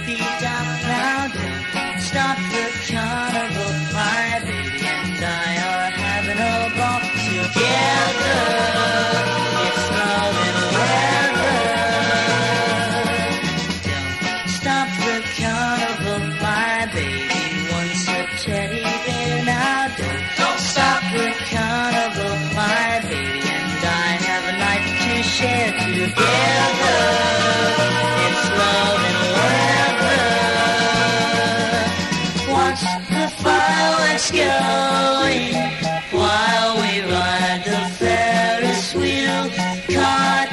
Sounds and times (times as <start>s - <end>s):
Music: 0.0s - 40.5s.